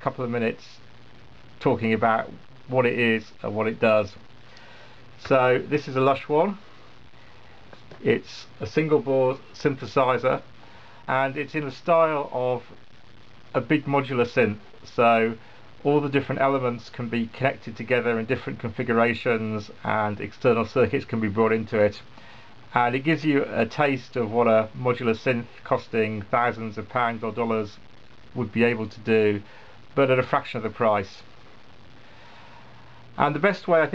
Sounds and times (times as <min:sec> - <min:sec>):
Speech: 0:00.0 - 0:00.8, 0:01.6 - 0:04.2, 0:05.2 - 0:06.6, 0:08.0 - 0:10.5, 0:11.1 - 0:12.8, 0:13.5 - 0:22.1, 0:22.7 - 0:27.8, 0:28.4 - 0:31.3, 0:33.2 - 0:33.9.